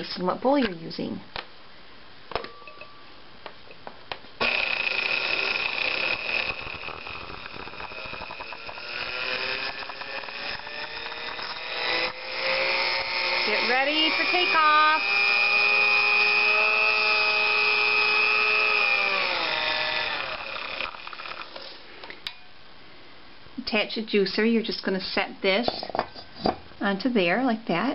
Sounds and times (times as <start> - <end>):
Blender: 4.4 - 21.8.